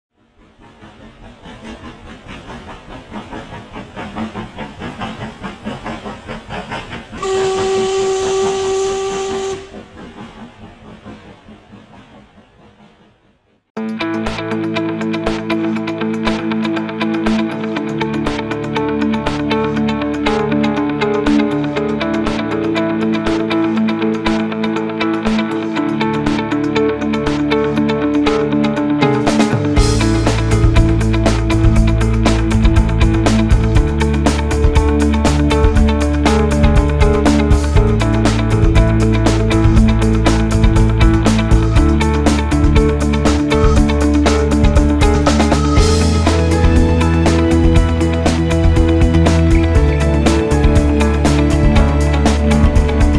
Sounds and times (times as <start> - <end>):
Hiss: 0.2 - 13.5
Steam whistle: 7.2 - 9.8.